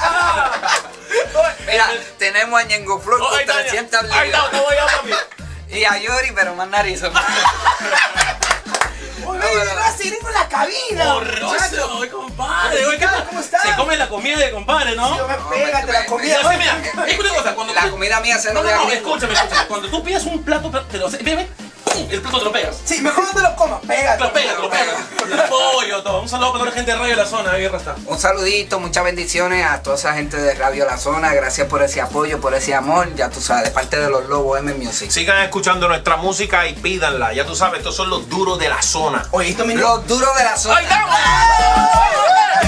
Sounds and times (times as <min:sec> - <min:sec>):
Music: 0:00.0 - 0:42.6
Speech: 0:01.4 - 0:07.2, 0:09.2 - 0:41.4.